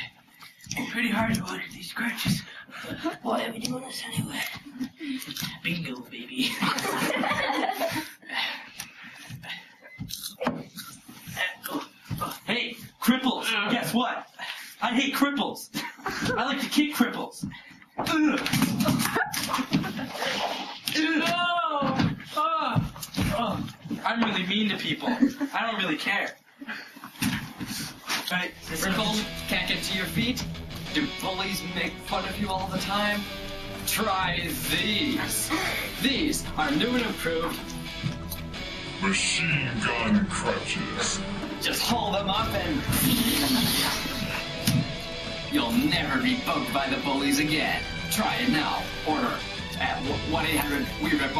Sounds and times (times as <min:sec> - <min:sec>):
Male speech, man speaking: 0:00.8 - 0:02.5, 0:05.5 - 0:06.9, 0:11.4 - 0:17.5, 0:21.0 - 0:26.4, 0:28.3 - 0:33.3, 0:33.9 - 0:37.6, 0:39.0 - 0:43.0, 0:45.5 - 0:51.4.